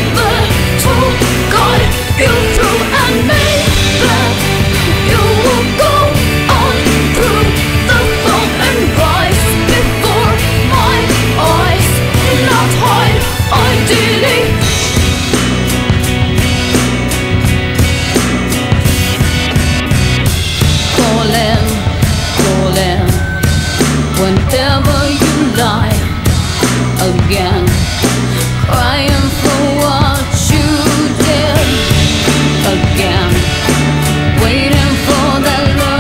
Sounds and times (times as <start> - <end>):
Disco: 0.0 - 36.0.